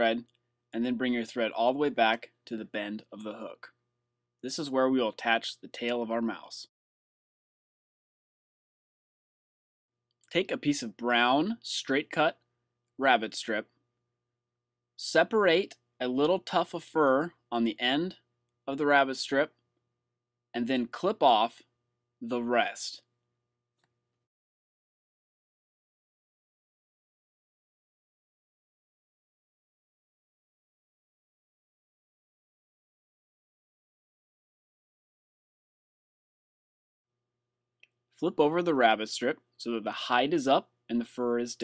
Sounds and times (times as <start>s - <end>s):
Speech: 0.0s - 3.8s, 4.4s - 6.7s, 10.3s - 12.4s, 13.0s - 13.7s, 15.0s - 19.6s, 20.6s - 23.0s, 38.2s - 41.6s.